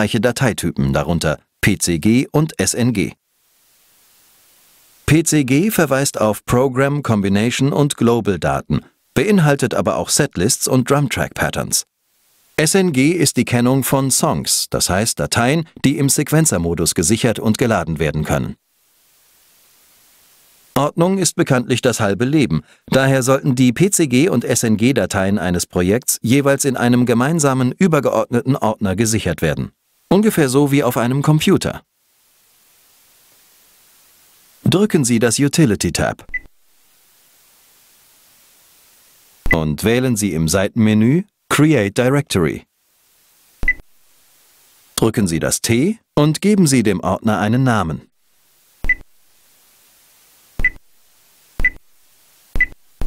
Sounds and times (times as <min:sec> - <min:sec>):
Speech: 0:00.0 - 0:03.2, 0:05.1 - 0:11.9, 0:12.6 - 0:18.6, 0:20.8 - 0:31.9, 0:34.6 - 0:36.3, 0:39.5 - 0:42.7, 0:45.0 - 0:48.1.